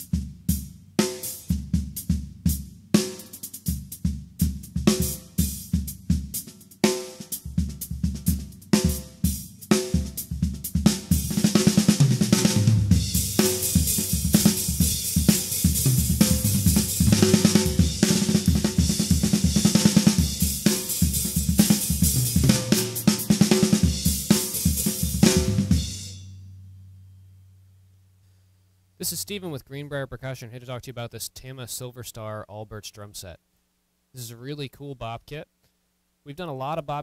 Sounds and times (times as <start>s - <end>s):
Music: 0.0s - 28.8s
Speech: 29.0s - 33.4s, 34.1s - 35.5s, 36.2s - 37.0s.